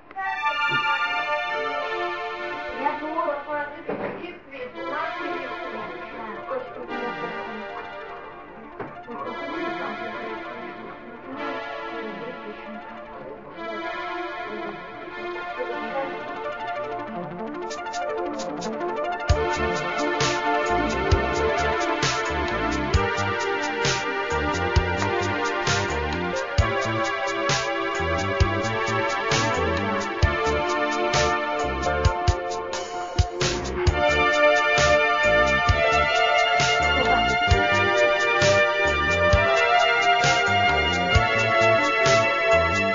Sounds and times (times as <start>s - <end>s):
Music: 0.0s - 42.9s.